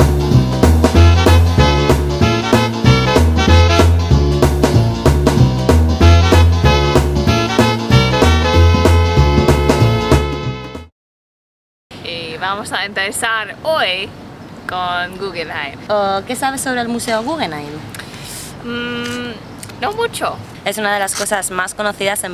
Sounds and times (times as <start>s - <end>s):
Swing music: 0.0s - 10.9s.